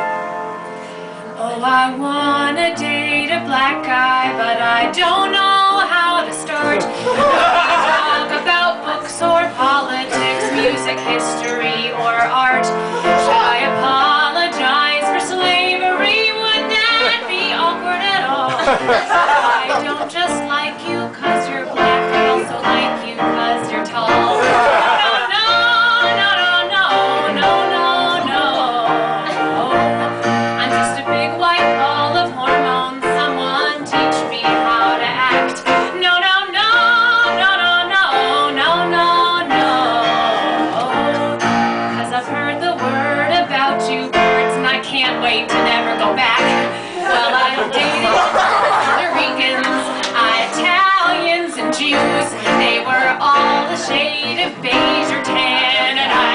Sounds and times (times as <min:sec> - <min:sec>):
Music: 0:00.0 - 0:56.3
Female singing: 0:01.4 - 0:56.3.